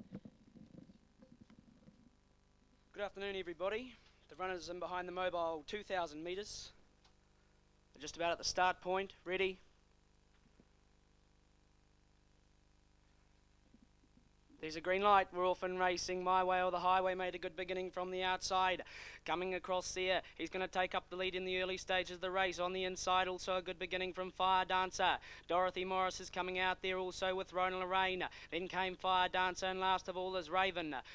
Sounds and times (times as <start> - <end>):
Speech: 2.9 - 6.8, 8.0 - 9.7, 14.6 - 31.1.